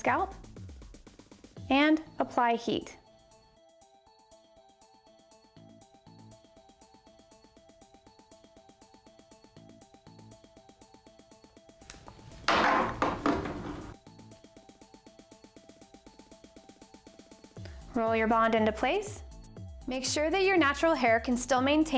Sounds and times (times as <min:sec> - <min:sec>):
Speech: 0:00.0 - 0:00.3, 0:01.7 - 0:03.0, 0:17.9 - 0:19.2, 0:19.9 - 0:21.9.